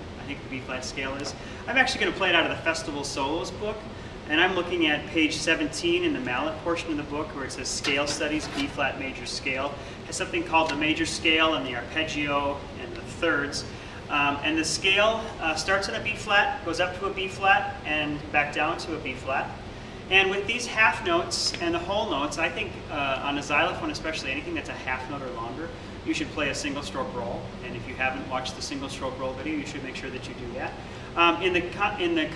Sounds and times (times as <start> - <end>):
Speech: 0.0 - 32.3.